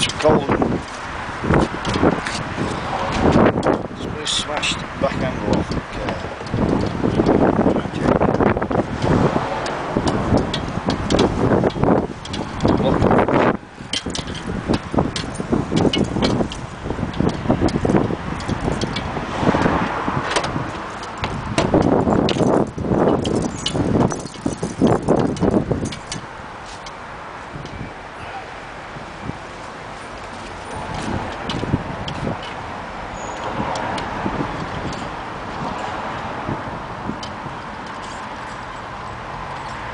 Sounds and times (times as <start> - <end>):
Car: 0.0 - 39.9.